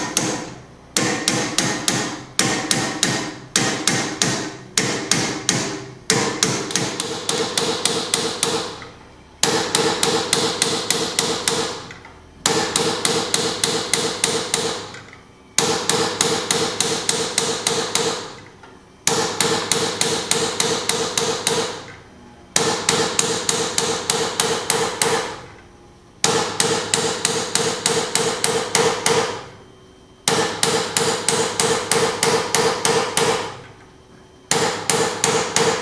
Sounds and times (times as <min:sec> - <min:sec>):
Hammer: 0:00.0 - 0:15.0, 0:15.6 - 0:21.9, 0:22.6 - 0:25.5, 0:26.2 - 0:29.5, 0:30.3 - 0:33.7, 0:34.5 - 0:35.8.